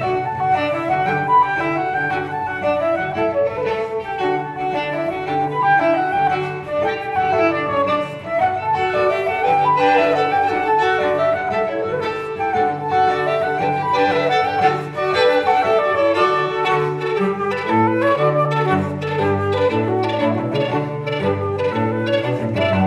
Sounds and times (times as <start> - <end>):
Cello: 0.0 - 22.8
Violin, fiddle: 0.0 - 22.8
Double bass: 15.8 - 22.8.